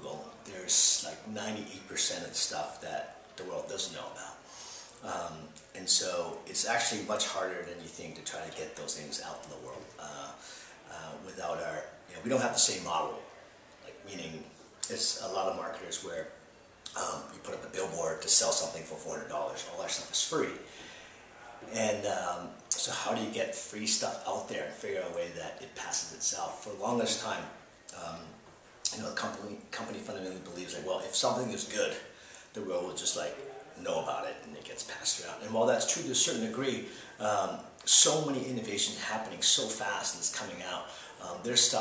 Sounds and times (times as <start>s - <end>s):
Speech: 0.0s - 20.7s, 21.4s - 41.8s.